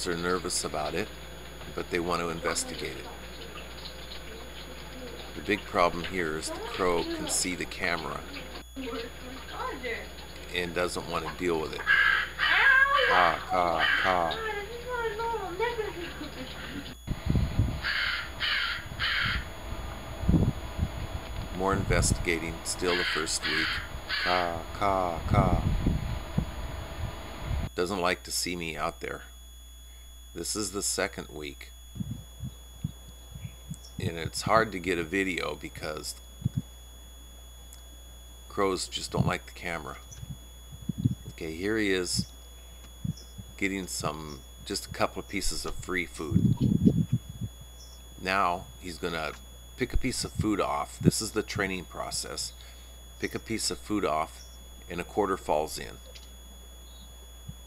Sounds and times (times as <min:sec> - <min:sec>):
Speech: 0:00.0 - 0:01.1, 0:01.8 - 0:03.3, 0:04.3 - 0:11.8, 0:12.5 - 0:16.2, 0:21.6 - 0:23.6, 0:24.3 - 0:25.7, 0:27.8 - 0:29.3, 0:30.4 - 0:31.7, 0:34.0 - 0:36.2, 0:38.5 - 0:40.0, 0:41.4 - 0:42.3, 0:43.6 - 0:46.5, 0:48.2 - 0:52.5, 0:53.2 - 0:56.0
Crow: 0:11.8 - 0:14.4, 0:17.8 - 0:19.5, 0:22.9 - 0:24.6.